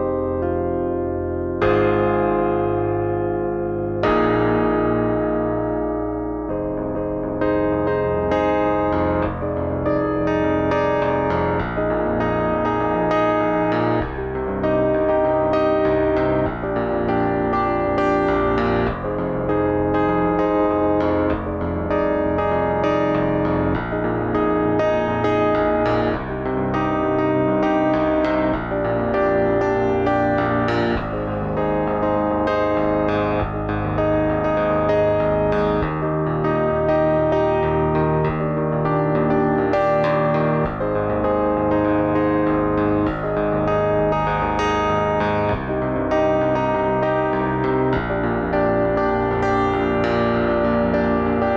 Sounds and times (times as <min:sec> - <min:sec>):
Keyboard (musical): 0:00.0 - 0:51.5.